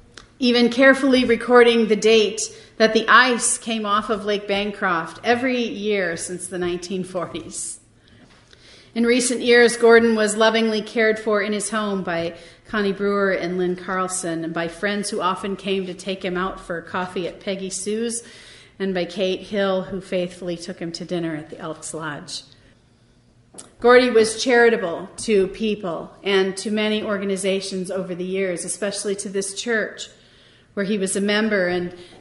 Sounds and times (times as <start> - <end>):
Speech: 0.4 - 7.8, 9.0 - 18.2, 18.8 - 22.6, 23.6 - 30.2, 30.8 - 32.0.